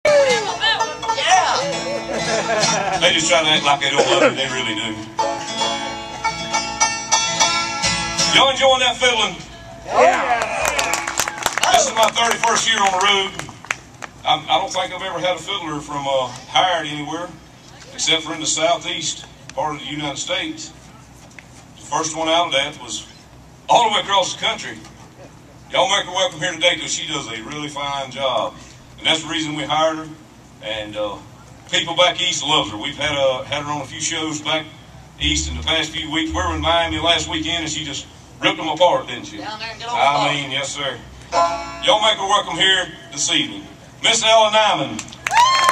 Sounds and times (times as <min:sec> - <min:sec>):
Bluegrass: 0:00.0 - 0:11.1
Banjo: 0:00.6 - 0:08.6, 0:35.2 - 0:38.0, 0:41.3 - 0:41.8.